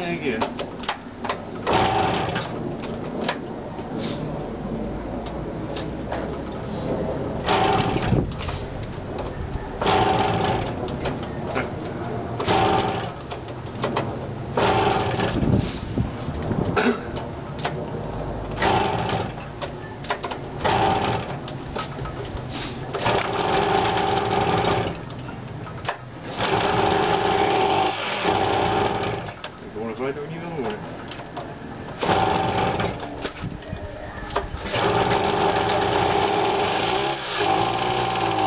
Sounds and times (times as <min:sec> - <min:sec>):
Vehicle: 0:00.0 - 0:38.4
Engine starting: 0:01.6 - 0:02.6, 0:07.4 - 0:08.7, 0:09.8 - 0:11.6, 0:12.4 - 0:13.3, 0:14.6 - 0:15.8, 0:18.6 - 0:19.5, 0:20.6 - 0:21.4, 0:22.5 - 0:25.1, 0:25.8 - 0:29.4, 0:32.0 - 0:33.4, 0:34.3 - 0:38.4.